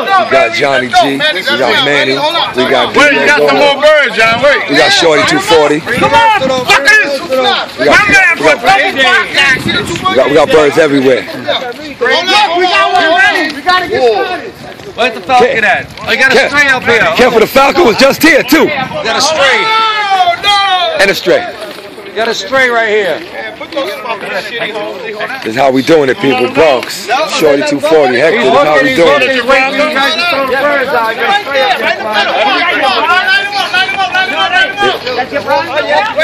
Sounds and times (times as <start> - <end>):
Speech: 0.0 - 36.2.